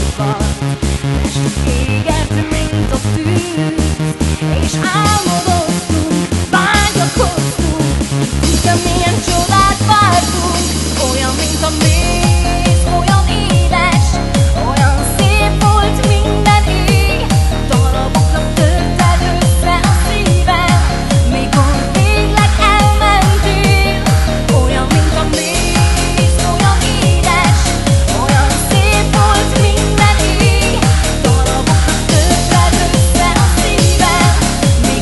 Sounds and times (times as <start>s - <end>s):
Music: 0.0s - 35.0s.